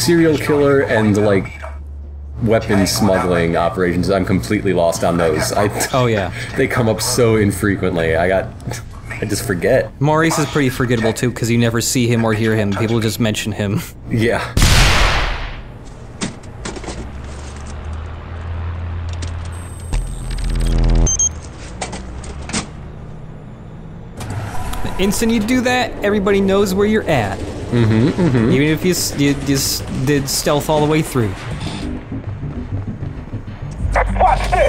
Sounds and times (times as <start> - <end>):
Outside, urban or manmade: 0.0 - 34.6
Speech: 2.4 - 8.5, 9.2 - 14.5, 24.8 - 31.3.